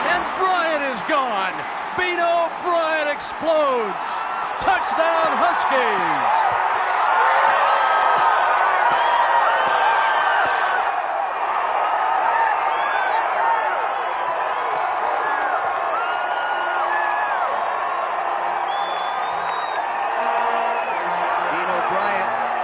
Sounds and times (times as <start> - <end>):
Speech: 0.0 - 6.4, 21.5 - 22.4
Music: 6.4 - 11.0.